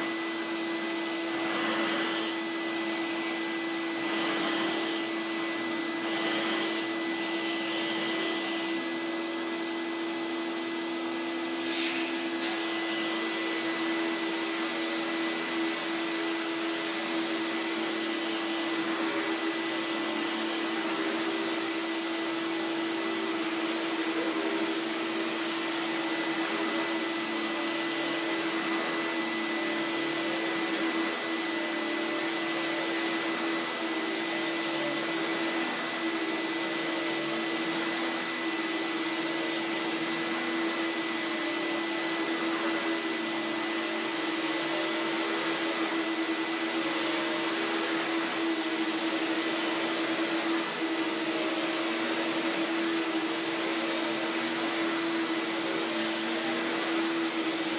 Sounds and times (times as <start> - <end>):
Vacuum cleaner: 0.0 - 57.7.